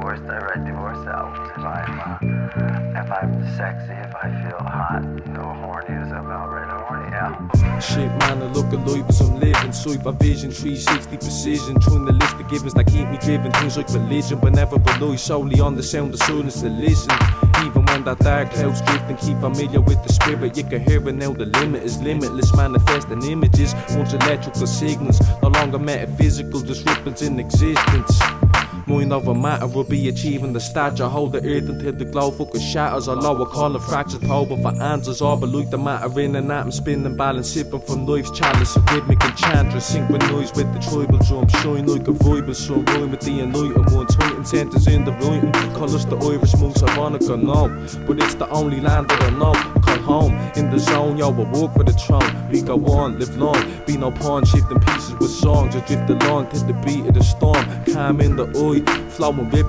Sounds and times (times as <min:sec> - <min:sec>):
Music: 0:00.0 - 0:59.6.